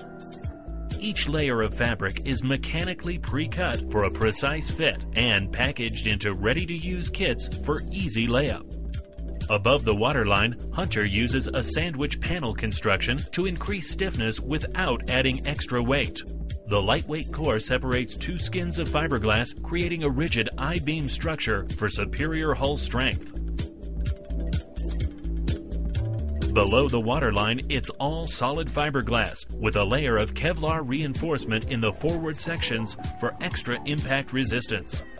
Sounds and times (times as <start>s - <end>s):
Music: 0.0s - 35.1s
Speech: 1.0s - 8.6s, 9.5s - 23.3s, 26.6s - 35.0s.